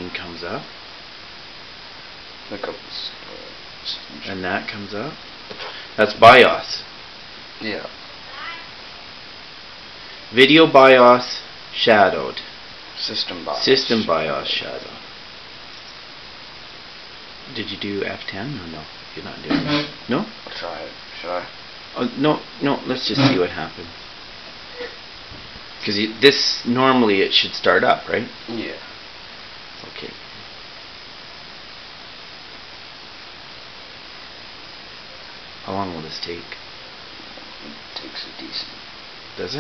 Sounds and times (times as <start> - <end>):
Speech: 0.0 - 0.7, 2.5 - 5.2, 6.0 - 6.9, 7.6 - 8.0, 10.3 - 15.0, 17.5 - 24.0, 25.8 - 28.9, 29.8 - 30.2, 35.6 - 36.6, 37.6 - 38.8, 39.4 - 39.6
Inside, small room: 0.0 - 39.6.